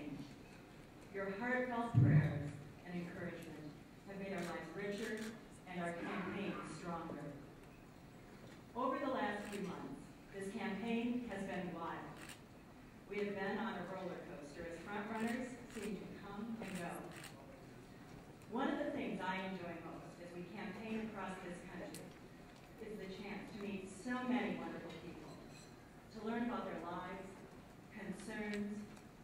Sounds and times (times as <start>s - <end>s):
Female speech, woman speaking: 0.0s - 0.3s, 1.2s - 7.4s, 8.8s - 12.2s, 13.1s - 17.5s, 18.5s - 22.1s, 22.8s - 25.4s, 26.1s - 28.9s.